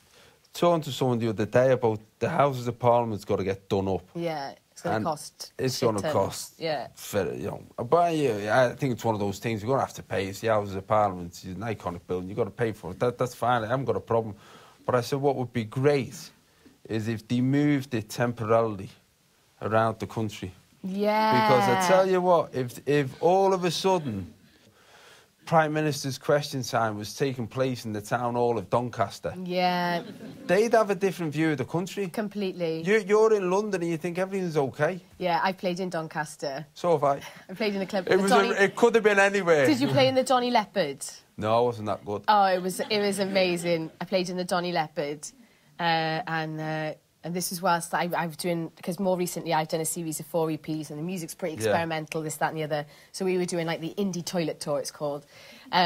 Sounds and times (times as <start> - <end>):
Conversation: 0.0 - 55.8.